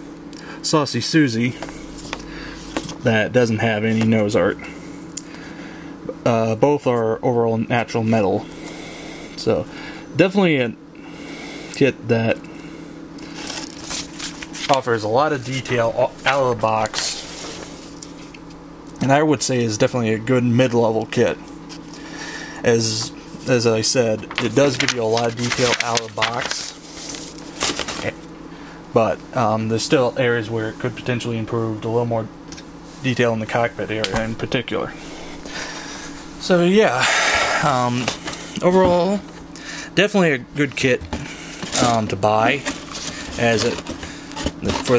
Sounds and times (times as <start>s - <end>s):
Speech: 0.6s - 1.6s, 3.0s - 4.7s, 6.1s - 8.5s, 9.4s - 10.8s, 11.8s - 12.4s, 14.7s - 17.2s, 19.0s - 21.4s, 22.6s - 26.7s, 28.9s - 32.3s, 33.0s - 35.0s, 36.4s - 39.3s, 40.0s - 41.1s, 41.7s - 42.7s, 43.4s - 43.8s, 44.6s - 44.9s.